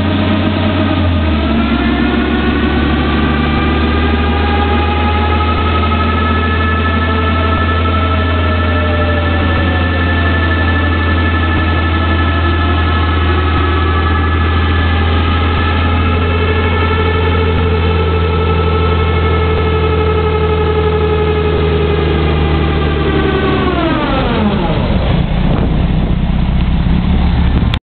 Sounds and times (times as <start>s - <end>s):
Truck: 0.0s - 27.8s.